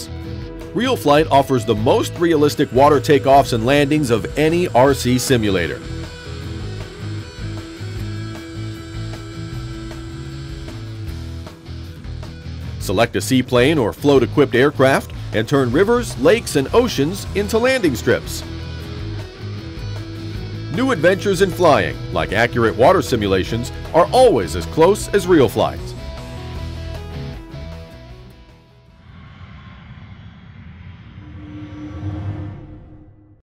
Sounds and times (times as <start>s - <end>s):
Music: 0.0s - 29.6s
Speech: 0.8s - 5.8s, 12.8s - 18.4s, 20.7s - 26.0s.